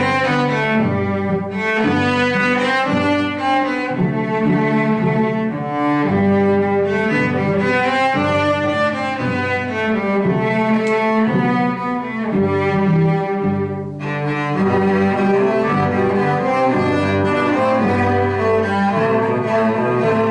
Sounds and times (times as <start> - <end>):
Classical music: 0.0 - 20.3.